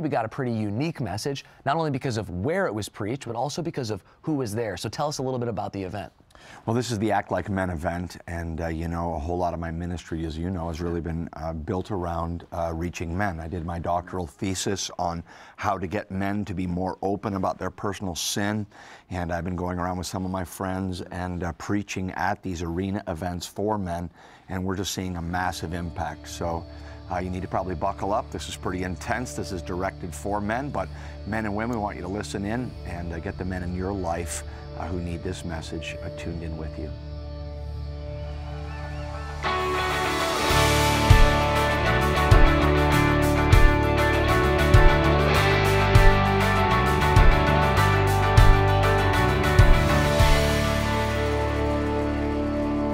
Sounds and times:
Speech: 0:00.0 - 0:06.1, 0:06.7 - 0:37.0
Music: 0:24.9 - 0:52.9.

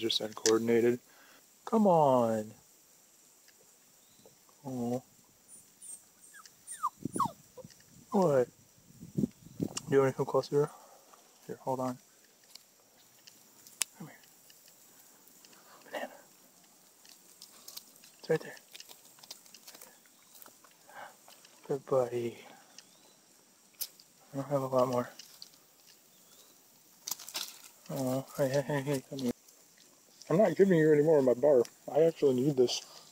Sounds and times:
Speech: 0:00.0 - 0:01.0, 0:01.7 - 0:02.6, 0:04.6 - 0:05.1, 0:08.1 - 0:08.5, 0:09.9 - 0:10.7, 0:11.4 - 0:12.0, 0:18.2 - 0:18.6, 0:21.7 - 0:22.6, 0:24.3 - 0:25.2, 0:27.9 - 0:29.4, 0:30.3 - 0:32.9
Outside, rural or natural: 0:00.0 - 0:33.1
Dog: 0:05.8 - 0:07.4.

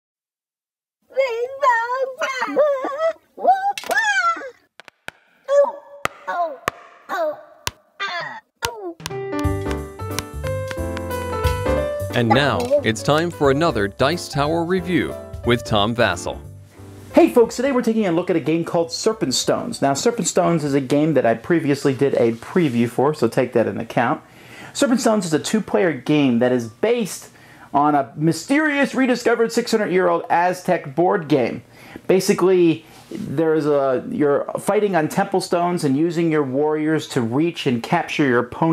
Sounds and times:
Music: 0:09.0 - 0:19.8.

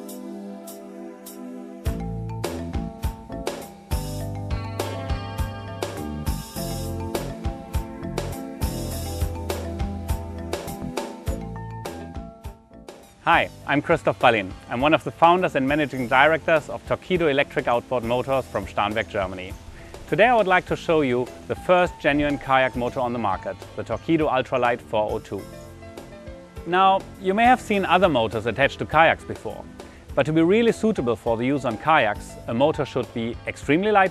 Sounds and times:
Music: 0:00.0 - 0:34.1
Speech: 0:13.3 - 0:25.5, 0:26.7 - 0:29.6, 0:30.2 - 0:34.1.

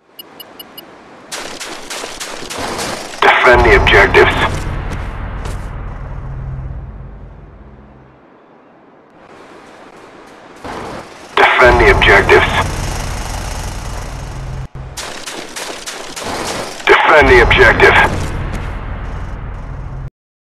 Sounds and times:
Speech: 0:03.2 - 0:04.6, 0:11.4 - 0:12.7, 0:16.9 - 0:18.2.

